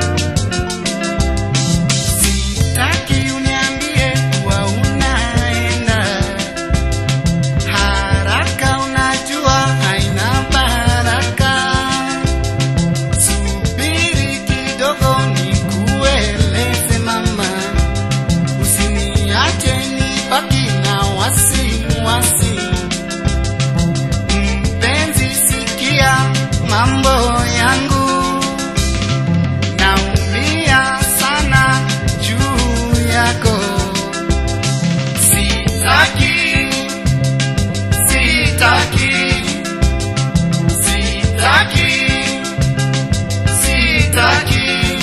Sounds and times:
Happy music: 0.0 - 45.0.

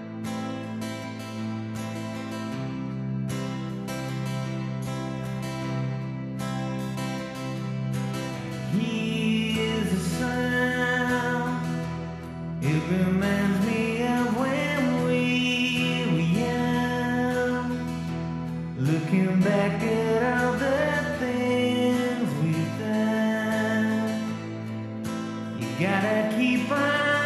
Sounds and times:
Music: 0.0 - 27.2.

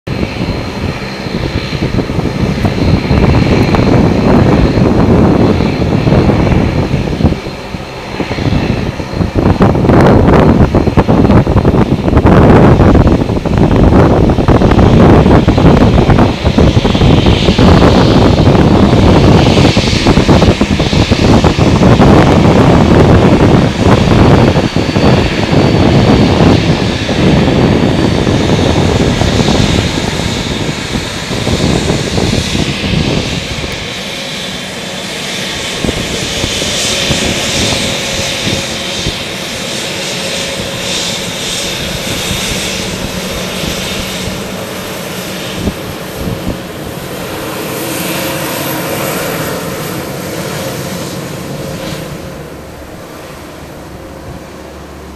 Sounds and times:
Fixed-wing aircraft, airplane: 0.0 - 55.1.

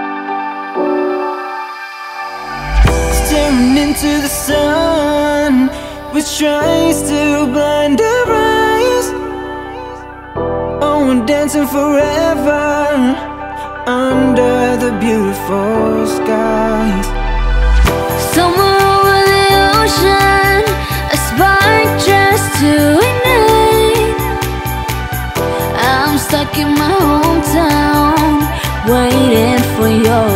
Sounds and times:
Rhythm and blues: 0.0 - 30.3.

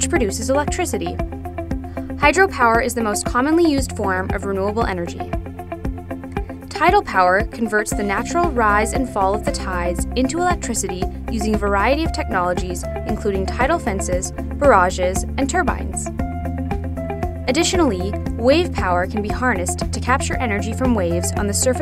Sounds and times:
Speech: 0.0 - 1.2, 2.2 - 5.3, 6.7 - 16.1, 17.5 - 21.8
Music: 0.0 - 21.8.

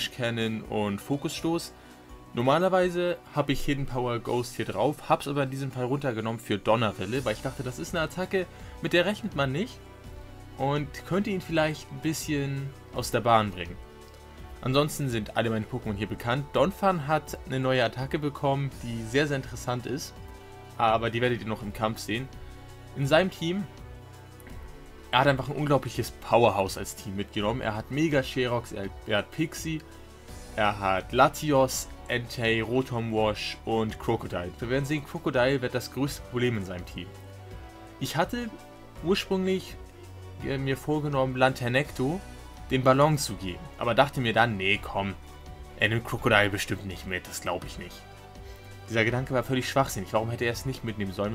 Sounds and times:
Speech: 0.0 - 9.8, 10.6 - 13.8, 14.6 - 22.4, 23.0 - 23.8, 25.1 - 29.9, 30.6 - 37.2, 38.0 - 39.8, 40.4 - 45.2, 45.8 - 48.1, 48.9 - 51.3
Music: 0.0 - 51.3.

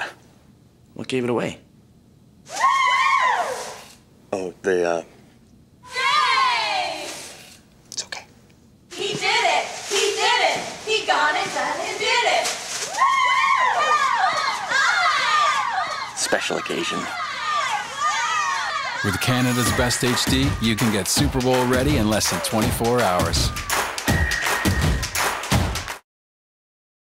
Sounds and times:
Speech: 19.0 - 23.5
Music: 19.4 - 26.0.

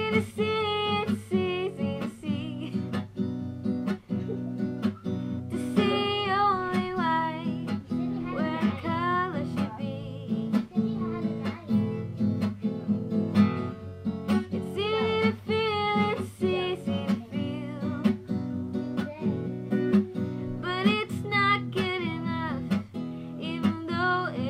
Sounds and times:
Music: 0.0 - 24.4
Speech: 7.9 - 12.8.

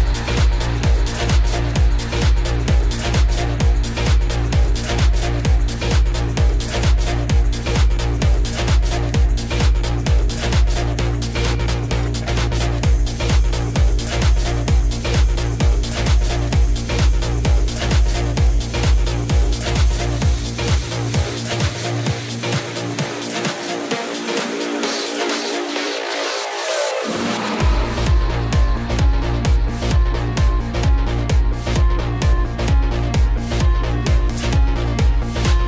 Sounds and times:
Techno: 0.0 - 35.6.

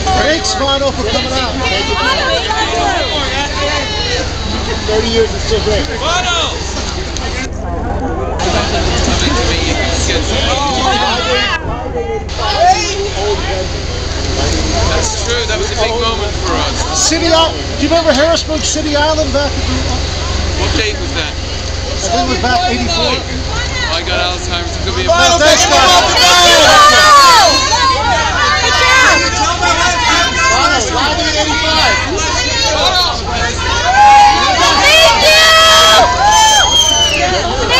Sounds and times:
Chatter: 0.0 - 37.7
Outside, urban or manmade: 0.0 - 37.7.

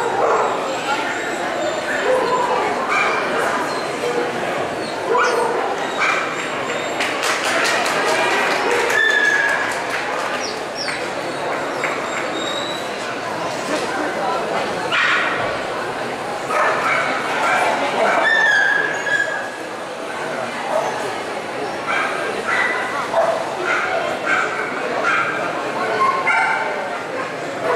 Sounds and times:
Bow-wow: 0.0 - 0.7, 5.1 - 6.4, 21.9 - 25.4
Speech: 0.0 - 27.7.

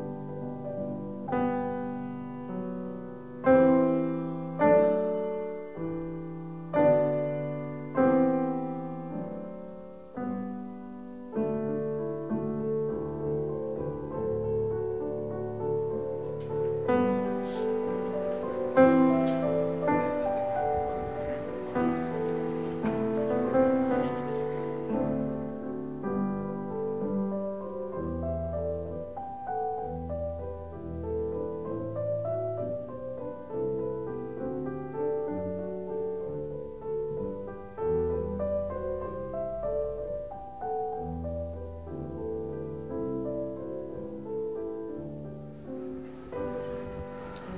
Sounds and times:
Music: 0.0 - 47.5.

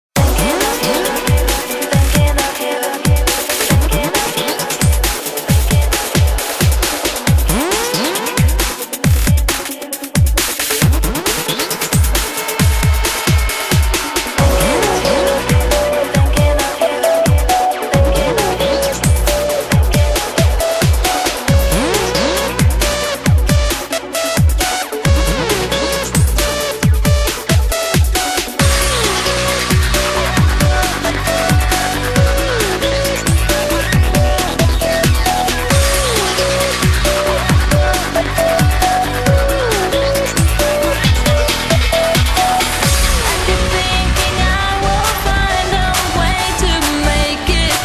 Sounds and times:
Drum and bass: 0.2 - 47.8
Electronica: 0.2 - 47.8.

